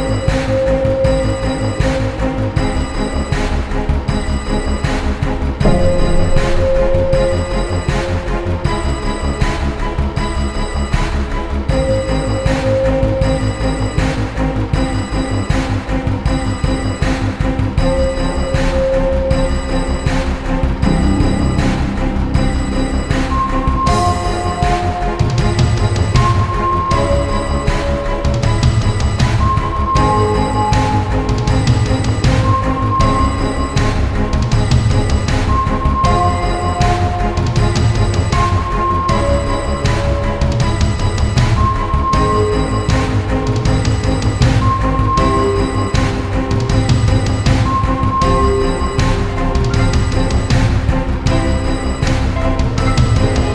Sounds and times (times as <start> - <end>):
Music: 0.0 - 53.5.